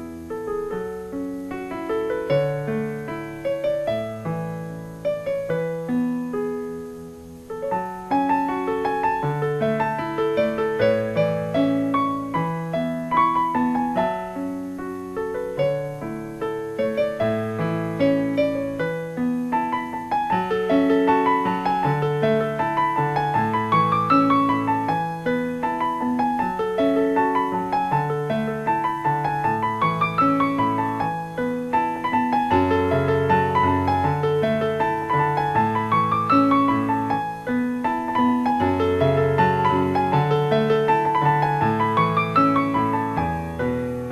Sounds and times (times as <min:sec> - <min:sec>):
Music: 0:00.0 - 0:44.1.